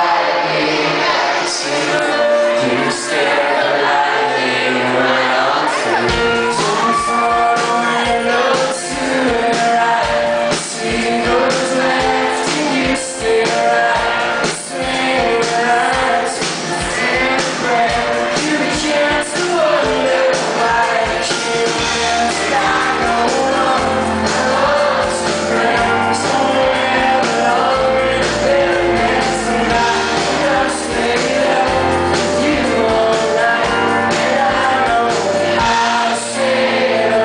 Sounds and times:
Male singing: 0.0s - 37.2s
Music: 0.0s - 37.2s.

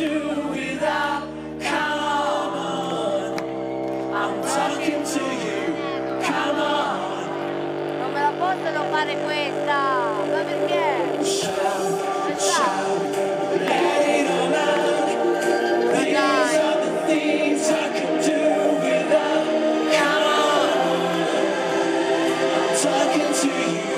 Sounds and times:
Music: 0.0s - 23.9s
Speech: 8.0s - 11.2s.

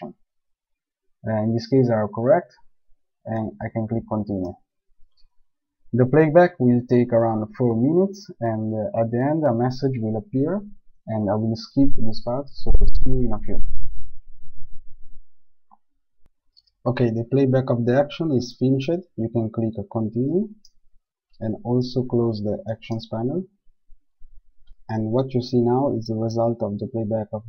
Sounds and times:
Speech: 1.2s - 2.6s, 3.3s - 4.6s, 6.0s - 13.6s, 16.9s - 20.6s, 21.4s - 23.5s, 24.9s - 27.4s.

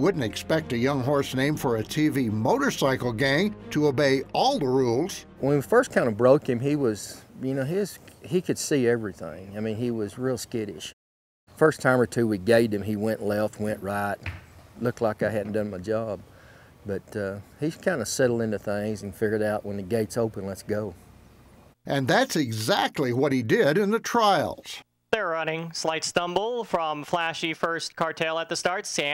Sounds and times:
Speech: 0.0s - 11.0s, 11.6s - 14.2s, 14.8s - 16.2s, 16.8s - 21.0s, 21.9s - 29.1s.

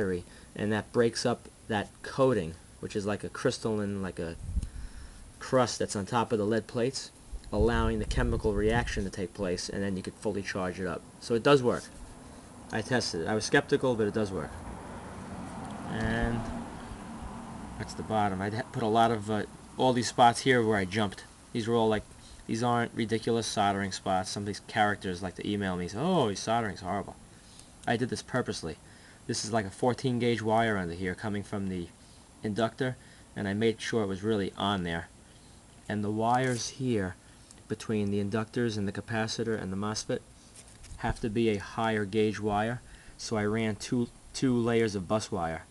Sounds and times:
Speech: 0.0s - 4.4s, 5.4s - 12.0s, 12.7s - 14.6s, 15.8s - 16.6s, 17.8s - 27.2s, 27.8s - 35.1s, 35.9s - 40.3s, 41.0s - 45.7s.

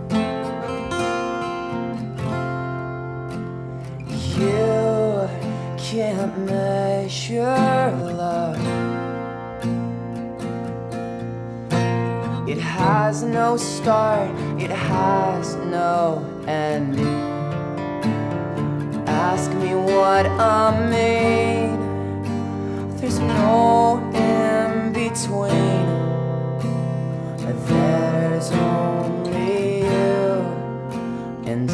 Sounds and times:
Music: 0.0s - 31.7s.

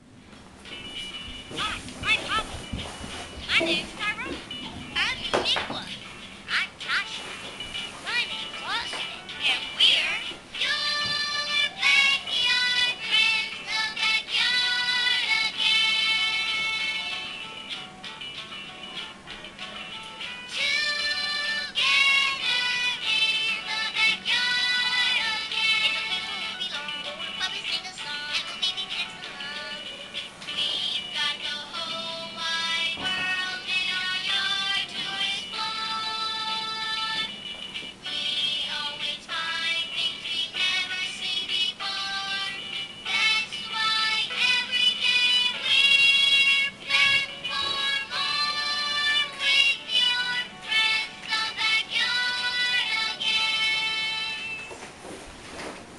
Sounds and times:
Music: 0.0s - 55.9s
Singing: 9.0s - 17.2s, 38.2s - 54.6s.

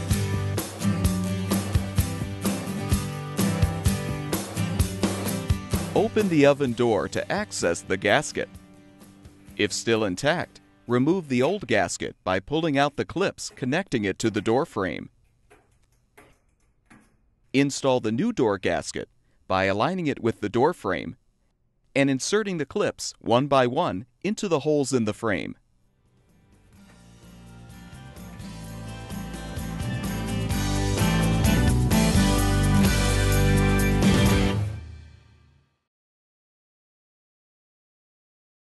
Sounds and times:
Music: 0.0s - 11.9s, 26.0s - 35.9s.

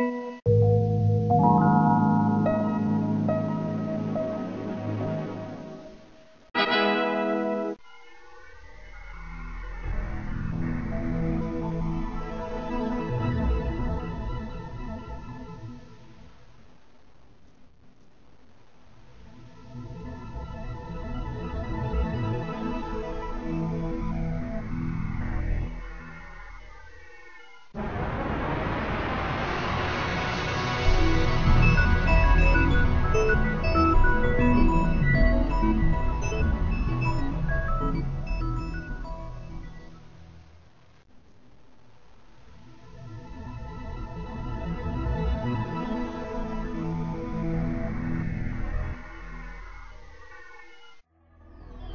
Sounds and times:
Sound effect: 0.0s - 16.2s, 21.6s - 41.4s, 44.3s - 51.9s
Music: 0.0s - 16.4s, 19.1s - 26.7s, 30.2s - 40.8s, 42.5s - 50.1s, 50.9s - 51.9s.

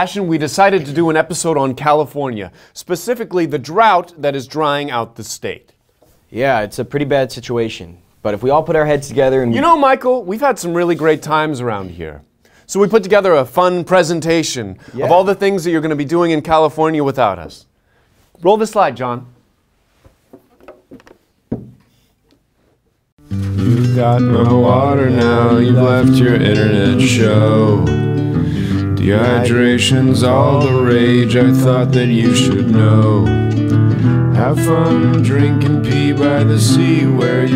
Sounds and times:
Speech: 0.0s - 5.7s, 6.3s - 17.7s, 18.4s - 19.4s.

